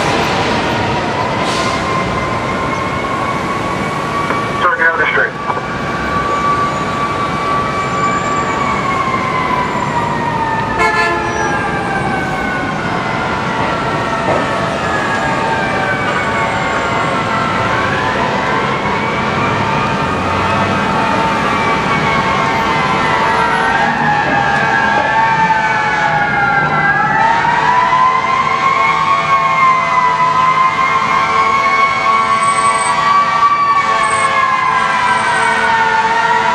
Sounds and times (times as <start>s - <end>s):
Fire engine, fire truck (siren): 0.0s - 36.5s.